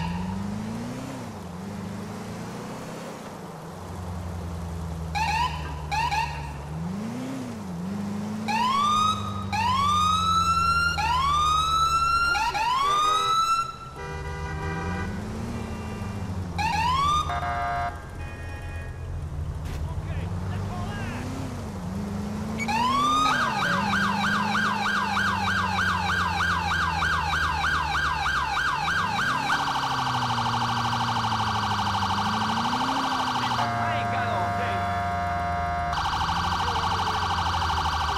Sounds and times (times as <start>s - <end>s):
Siren: 5.1s - 6.6s, 8.4s - 13.9s, 15.4s - 18.0s, 22.5s - 38.1s.